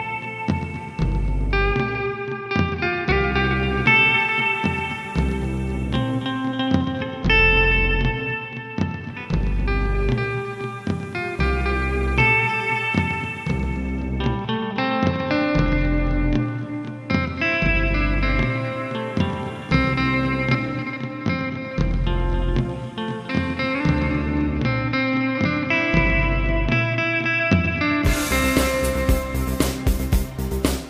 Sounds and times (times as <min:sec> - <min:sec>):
Electric guitar: 0:00.0 - 0:30.9.